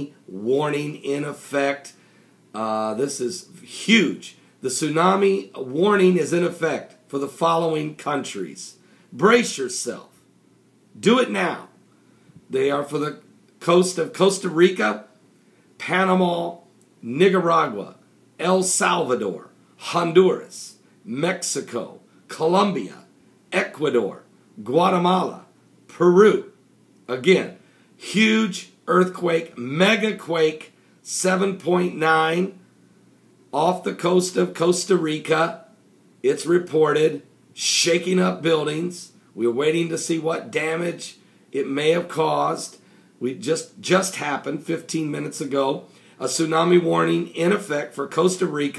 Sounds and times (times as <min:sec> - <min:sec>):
Speech: 0:00.0 - 0:02.0, 0:02.6 - 0:10.2, 0:11.0 - 0:11.8, 0:12.5 - 0:15.2, 0:15.8 - 0:32.6, 0:33.5 - 0:48.7.